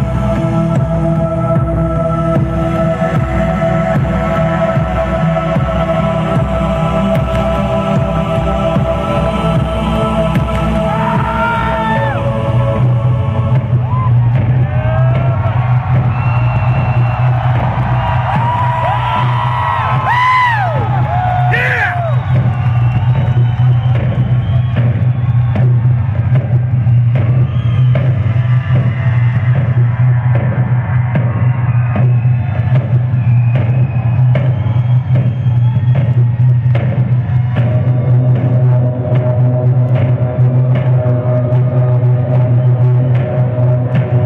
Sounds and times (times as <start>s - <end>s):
Crowd: 0.0s - 44.2s
Music: 0.0s - 44.2s.